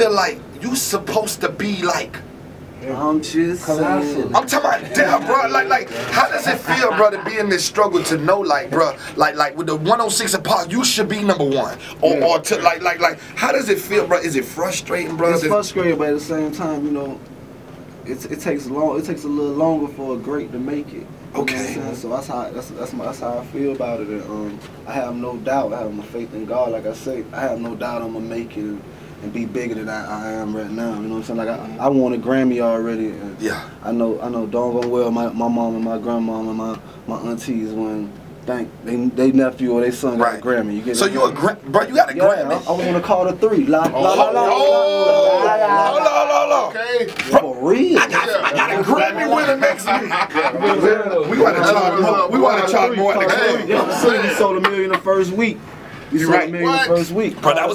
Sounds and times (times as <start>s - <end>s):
Speech: 0.0s - 2.2s, 2.8s - 17.2s, 18.0s - 57.7s.